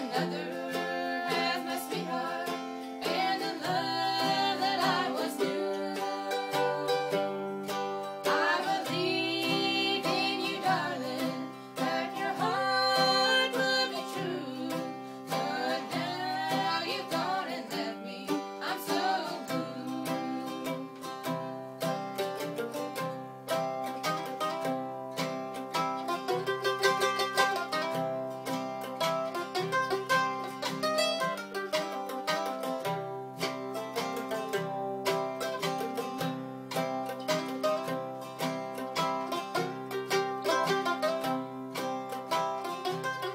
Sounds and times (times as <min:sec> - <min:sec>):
Country: 0:00.0 - 0:43.3
Mandolin: 0:00.0 - 0:43.3.